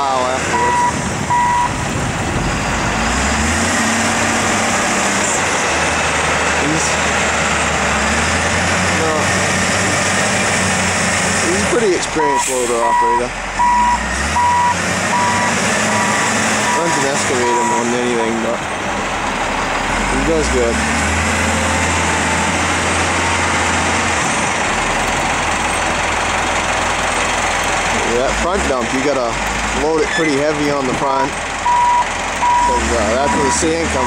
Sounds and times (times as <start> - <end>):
Speech: 0.0 - 0.8, 9.0 - 9.3, 11.4 - 13.4, 16.7 - 18.6, 20.1 - 20.8, 28.0 - 31.4, 32.6 - 34.0
Reversing beeps: 0.5 - 1.8, 12.3 - 18.0, 31.7 - 34.0.